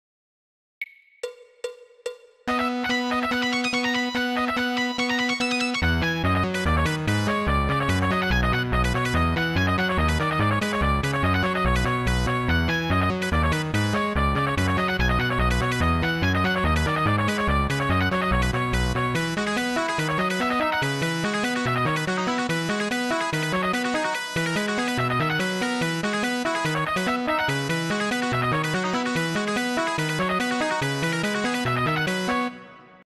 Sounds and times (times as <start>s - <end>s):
Music: 0.8s - 33.0s.